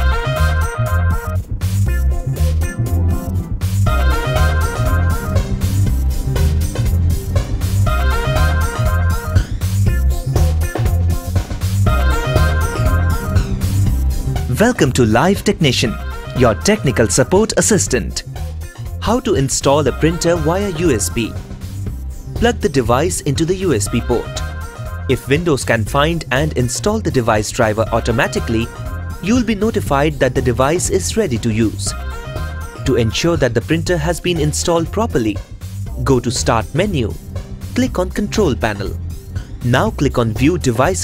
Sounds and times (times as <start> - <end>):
Music: 0.0 - 41.0
Speech: 14.5 - 18.2, 19.0 - 21.4, 22.4 - 24.4, 25.1 - 31.9, 32.9 - 35.4, 36.0 - 37.2, 37.8 - 39.0, 39.6 - 41.0.